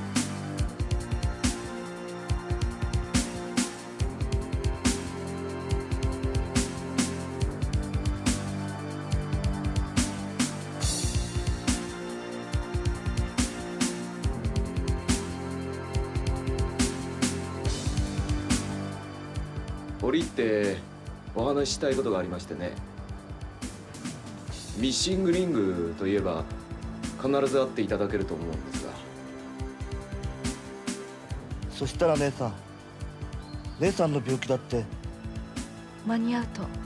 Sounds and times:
Music: 0.0 - 36.8
Speech: 20.0 - 20.8, 21.4 - 22.8, 24.8 - 26.4, 27.2 - 29.0, 31.7 - 32.6, 33.8 - 34.9.

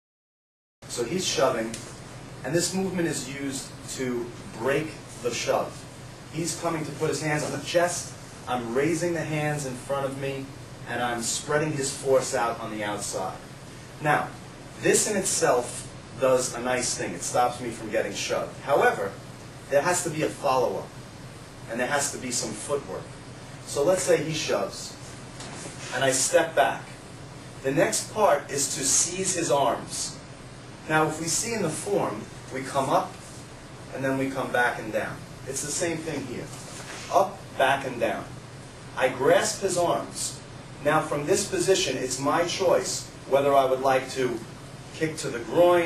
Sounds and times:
Speech: 0.9 - 21.0, 21.7 - 25.0, 25.8 - 27.0, 27.6 - 30.2, 30.8 - 33.3, 33.9 - 38.4, 39.0 - 45.8.

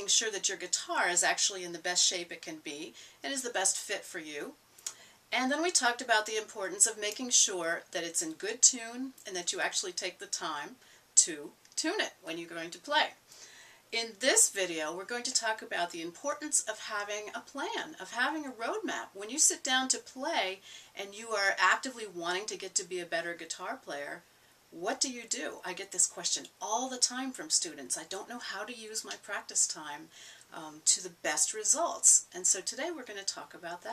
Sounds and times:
Speech: 0.0 - 4.6, 5.4 - 13.2, 14.0 - 24.2, 24.8 - 33.9.

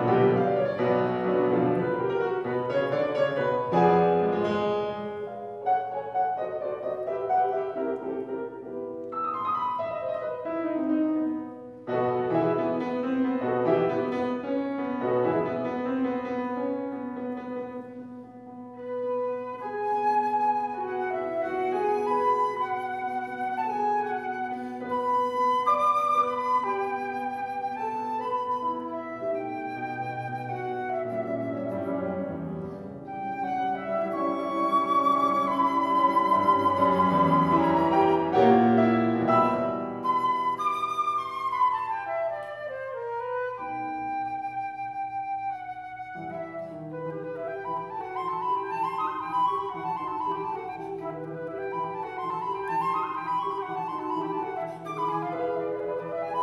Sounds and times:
Classical music: 0.0 - 56.4.

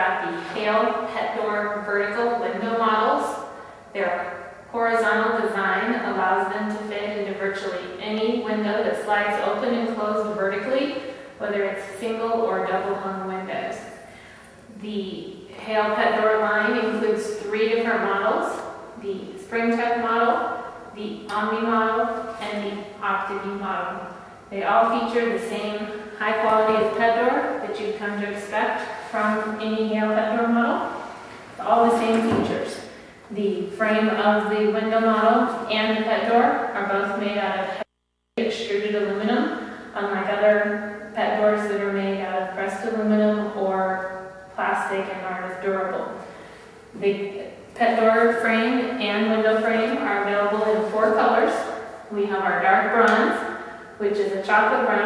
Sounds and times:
Speech: 0.0 - 3.4, 4.0 - 13.9, 14.7 - 30.9, 31.6 - 46.2, 47.0 - 55.0.

